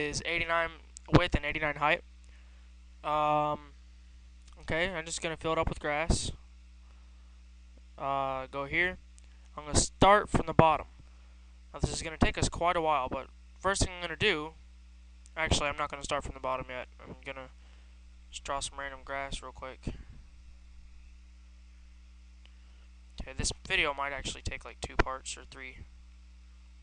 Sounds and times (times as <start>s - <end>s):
Speech: 0.0s - 2.0s, 3.1s - 3.7s, 4.5s - 6.4s, 8.0s - 9.0s, 9.6s - 10.9s, 11.8s - 14.6s, 15.4s - 17.5s, 18.3s - 20.0s, 23.2s - 25.9s.